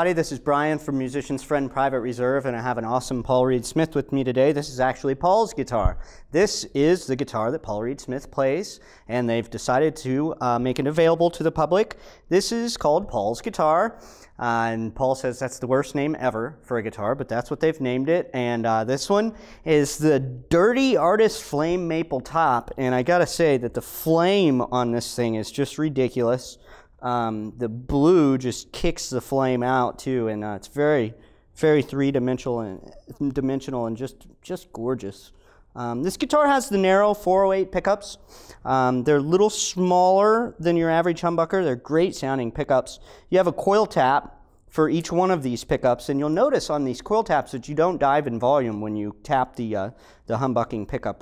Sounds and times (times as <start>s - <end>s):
Speech: 0.0s - 51.2s.